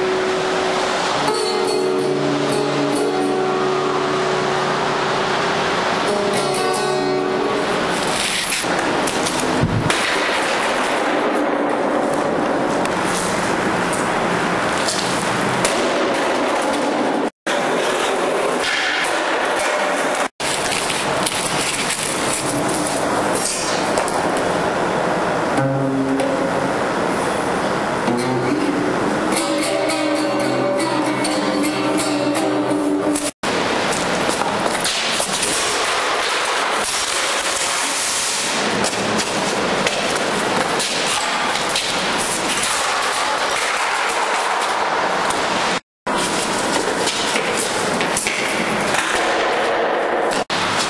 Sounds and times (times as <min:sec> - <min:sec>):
Strum: 0:00.0 - 0:05.1, 0:06.0 - 0:08.4, 0:25.5 - 0:27.0, 0:28.0 - 0:33.3.